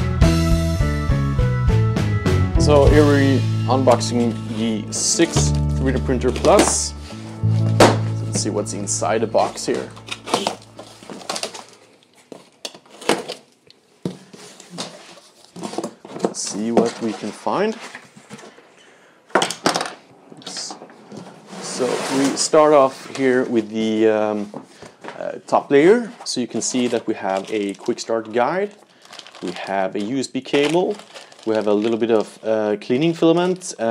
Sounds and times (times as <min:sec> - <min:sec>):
Speech: 0:02.6 - 0:07.0, 0:08.3 - 0:10.5, 0:16.3 - 0:17.9, 0:20.4 - 0:20.8, 0:21.6 - 0:24.6, 0:25.2 - 0:28.8, 0:29.4 - 0:33.9.